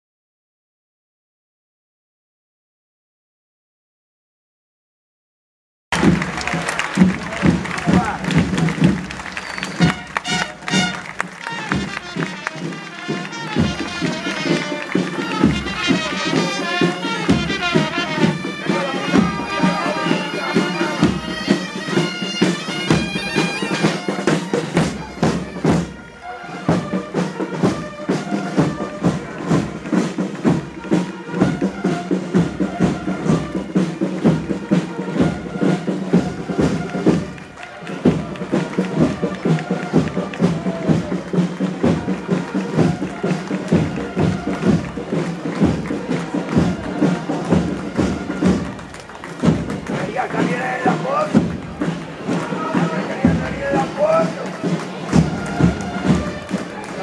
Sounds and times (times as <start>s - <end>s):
Outside, urban or manmade: 5.9s - 57.0s
Music: 6.0s - 57.0s.